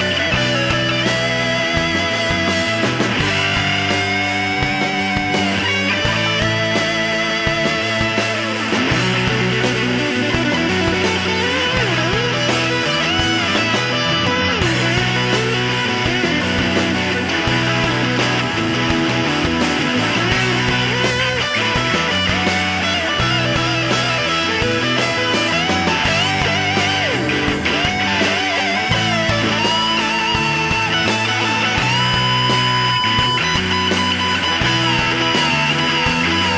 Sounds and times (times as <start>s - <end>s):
Music: 0.0s - 36.5s.